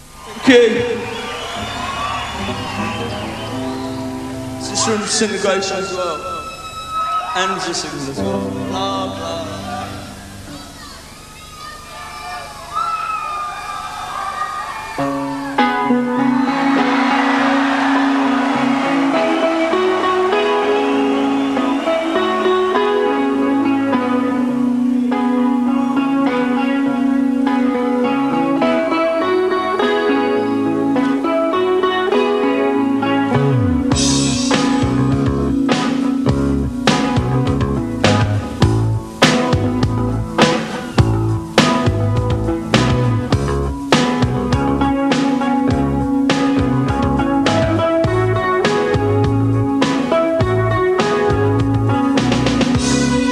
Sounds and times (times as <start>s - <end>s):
Music: 0.0s - 53.3s.